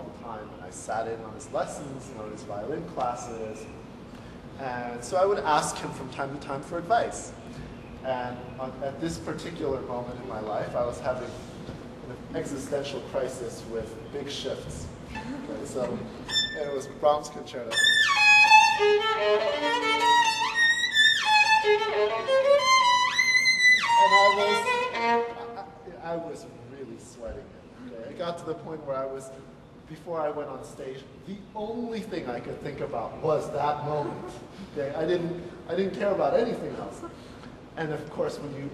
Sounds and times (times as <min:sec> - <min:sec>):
Speech: 0:00.0 - 0:03.8, 0:04.6 - 0:07.4, 0:08.0 - 0:11.4, 0:12.1 - 0:14.9, 0:15.5 - 0:17.8, 0:24.0 - 0:24.7, 0:25.4 - 0:37.1, 0:37.8 - 0:38.7
Violin, fiddle: 0:16.2 - 0:16.8, 0:17.6 - 0:25.7.